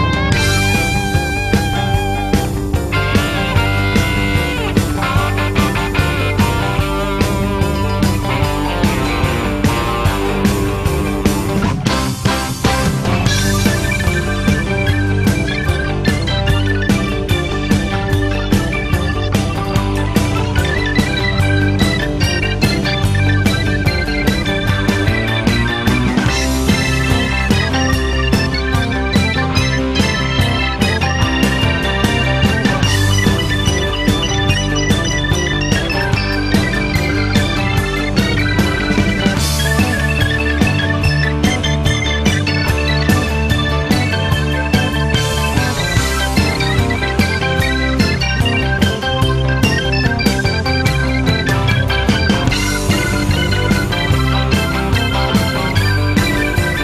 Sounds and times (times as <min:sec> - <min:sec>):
Music: 0:00.0 - 0:56.8.